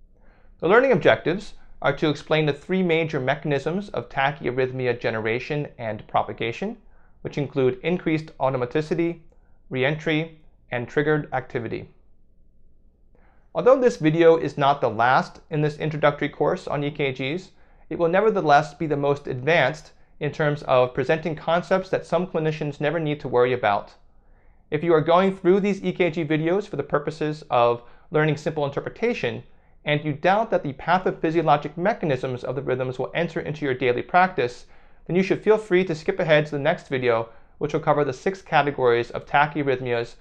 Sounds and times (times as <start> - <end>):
Speech: 0.6 - 12.0, 13.6 - 24.0, 24.7 - 40.2.